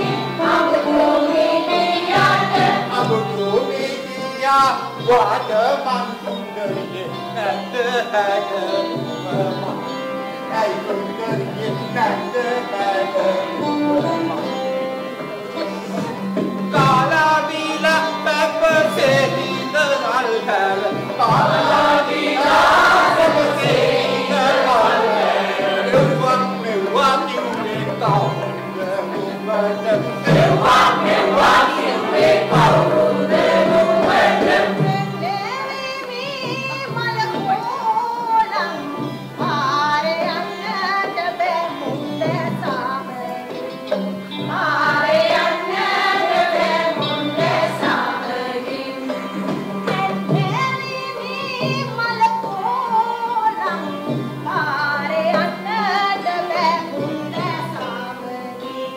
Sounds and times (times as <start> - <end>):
Traditional music: 0.0 - 58.9.